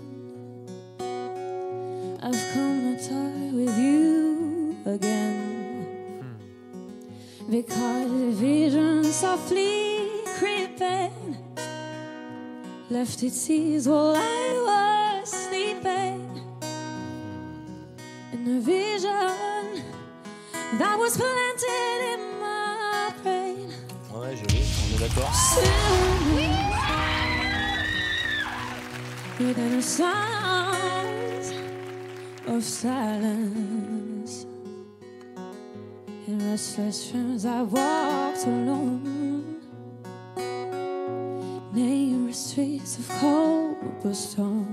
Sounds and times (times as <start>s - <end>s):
Acoustic guitar: 0.0s - 44.7s
Speech: 24.0s - 26.6s.